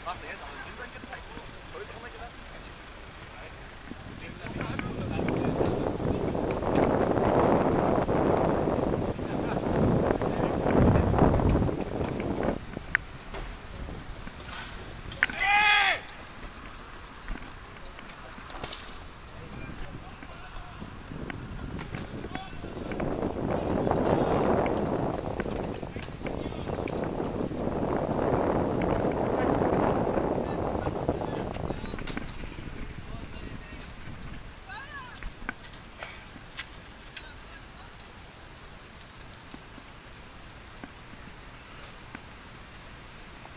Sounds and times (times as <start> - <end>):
Bicycle: 0.0 - 43.5.